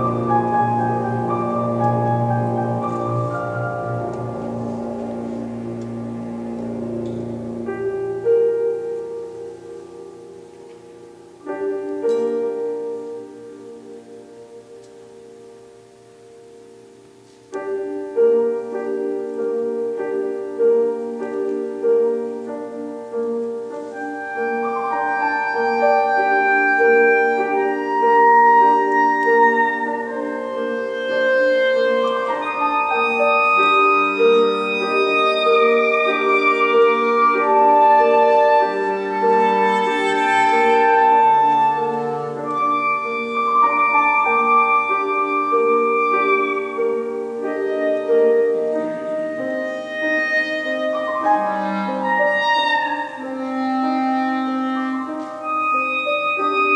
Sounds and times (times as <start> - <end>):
Brass instrument: 0.0 - 56.7
Clarinet: 0.0 - 56.7.